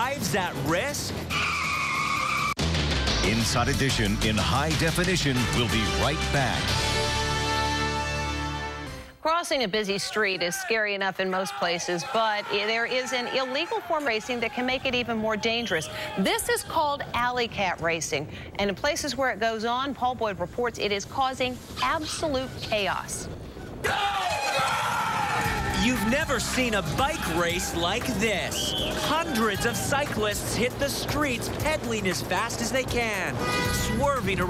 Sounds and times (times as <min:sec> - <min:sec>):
Music: 0:00.0 - 0:09.2, 0:25.4 - 0:34.4.